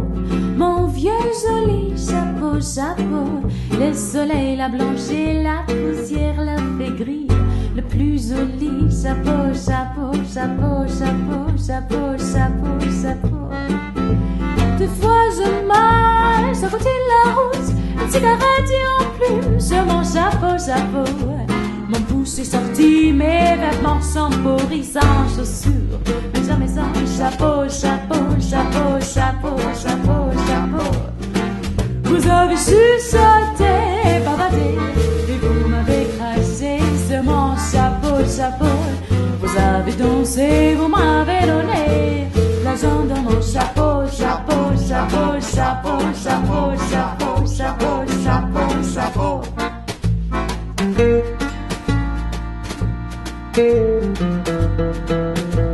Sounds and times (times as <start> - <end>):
Music: 0.0 - 55.7.